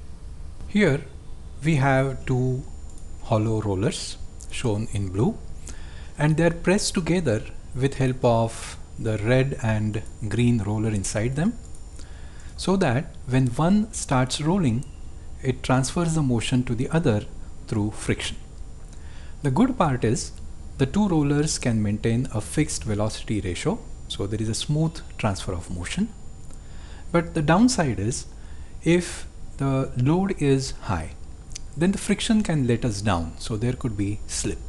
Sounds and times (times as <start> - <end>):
Speech: 0.7 - 5.5, 6.2 - 11.6, 12.6 - 18.4, 19.4 - 26.2, 27.1 - 34.6.